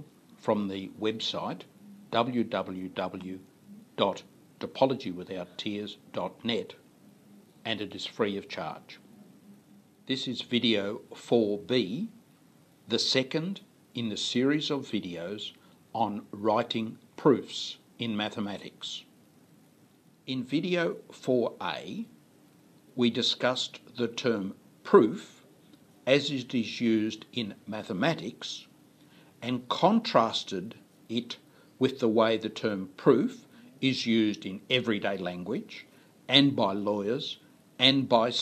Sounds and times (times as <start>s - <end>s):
Speech: 0.0s - 6.8s, 7.6s - 9.1s, 10.1s - 12.2s, 12.9s - 19.2s, 20.3s - 22.2s, 23.0s - 25.4s, 26.0s - 28.8s, 29.4s - 38.4s.